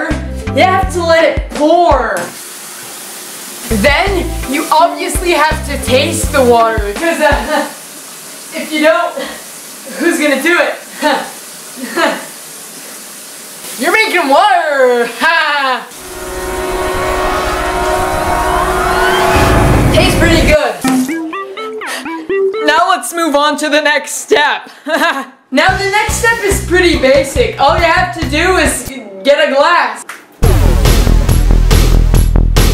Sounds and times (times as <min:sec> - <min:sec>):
Music: 0:00.0 - 0:02.3, 0:03.7 - 0:07.5, 0:16.0 - 0:23.1, 0:25.7 - 0:28.9, 0:30.4 - 0:32.7
Speech: 0:00.0 - 0:02.3, 0:03.7 - 0:07.7, 0:08.5 - 0:12.0, 0:13.8 - 0:15.9, 0:19.9 - 0:20.8, 0:22.6 - 0:24.7, 0:25.5 - 0:30.1.